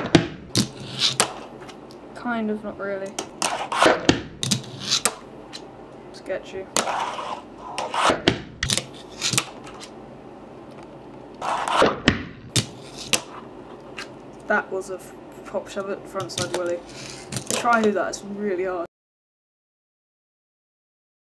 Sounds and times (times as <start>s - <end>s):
Speech: 2.2s - 3.2s, 6.2s - 6.8s, 14.5s - 16.8s, 17.5s - 18.9s.